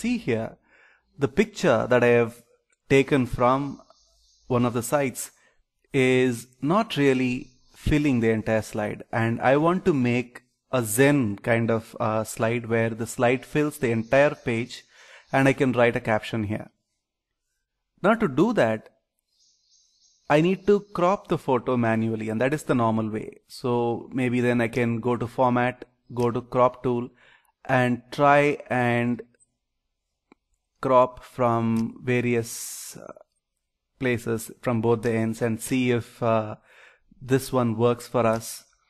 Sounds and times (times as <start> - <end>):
Speech: 0.0 - 0.6, 1.2 - 3.8, 4.5 - 5.3, 6.0 - 16.7, 18.0 - 18.9, 20.3 - 27.1, 27.7 - 29.3, 30.8 - 33.2, 34.0 - 36.6, 37.2 - 38.7.